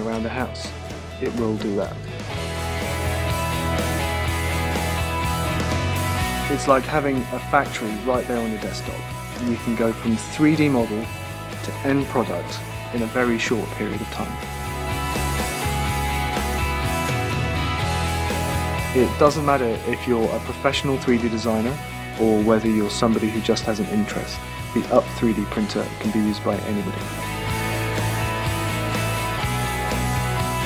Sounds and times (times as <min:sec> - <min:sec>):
Speech: 0:00.0 - 0:02.0, 0:06.4 - 0:14.4, 0:19.0 - 0:27.1
Music: 0:00.0 - 0:30.6.